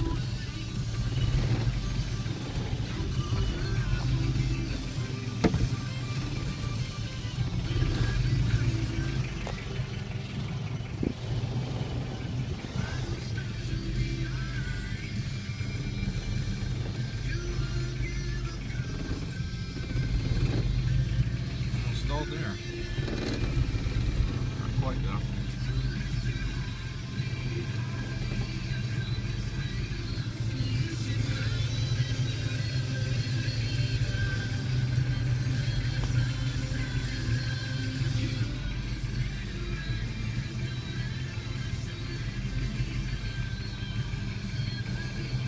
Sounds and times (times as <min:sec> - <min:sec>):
Car: 0:00.0 - 0:45.4
Music: 0:00.0 - 0:45.4
Speech: 0:21.9 - 0:22.6, 0:24.6 - 0:25.3.